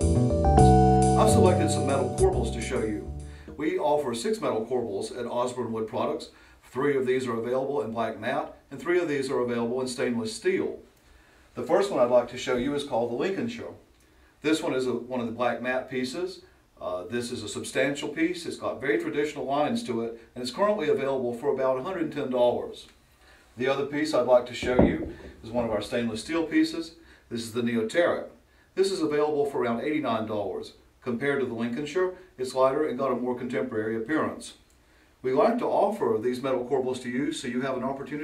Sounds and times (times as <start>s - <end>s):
Speech: 1.2s - 10.9s, 11.6s - 13.8s, 14.4s - 23.0s, 23.6s - 34.6s, 35.2s - 38.2s.